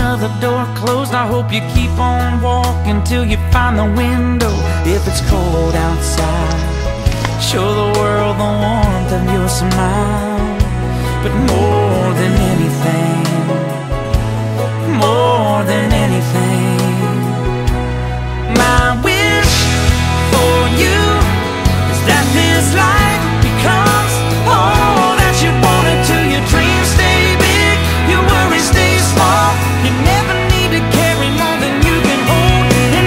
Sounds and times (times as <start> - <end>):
Tender music: 0.0 - 33.0.